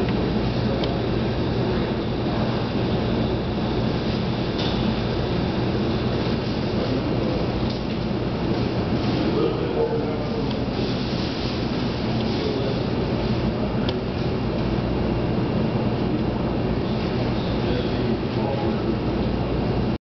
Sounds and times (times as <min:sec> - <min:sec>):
Speech: 0:06.7 - 0:07.9, 0:09.0 - 0:11.3, 0:12.0 - 0:14.3, 0:17.3 - 0:19.1.